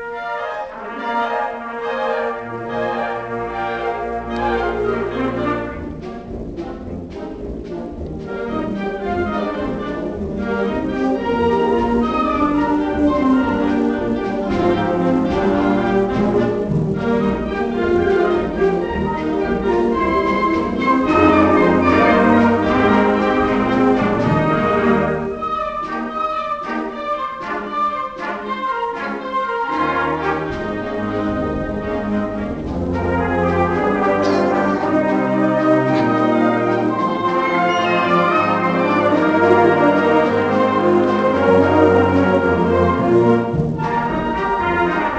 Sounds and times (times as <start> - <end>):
Music: 0.0 - 45.1.